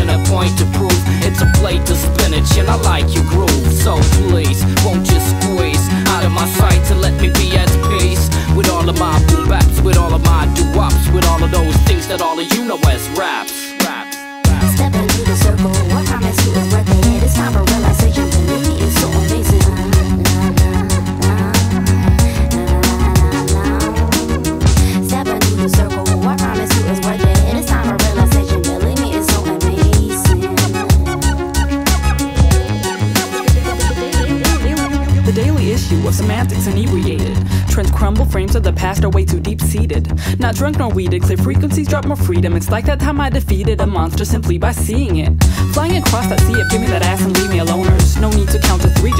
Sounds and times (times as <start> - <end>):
Funk: 0.0 - 13.2, 13.8 - 38.6.